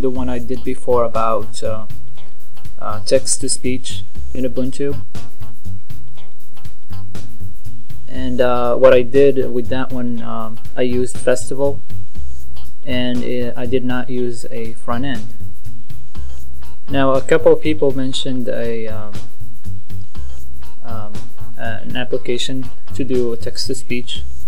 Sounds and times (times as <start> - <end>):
Speech: 0.0 - 1.9, 2.8 - 5.0, 8.1 - 11.8, 12.9 - 15.3, 16.9 - 19.2, 20.9 - 24.2
Music: 0.0 - 24.4.